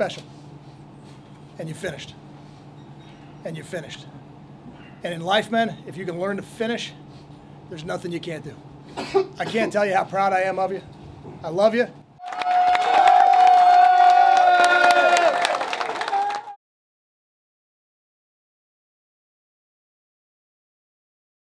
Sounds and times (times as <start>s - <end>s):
Male speech, man speaking: 0.0s - 0.2s, 1.6s - 2.2s, 3.4s - 4.1s, 5.0s - 7.0s, 7.7s - 8.6s, 9.4s - 12.0s
Narration, monologue: 0.0s - 12.2s.